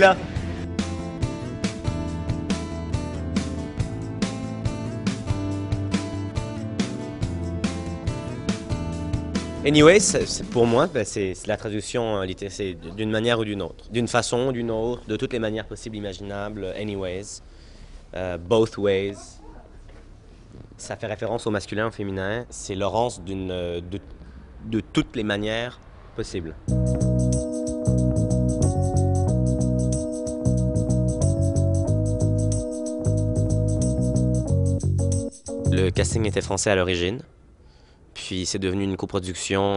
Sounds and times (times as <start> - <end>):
Speech: 0.0 - 0.2, 9.6 - 17.4, 18.1 - 19.8, 20.8 - 24.0, 24.6 - 26.6, 35.7 - 37.3, 38.2 - 39.7.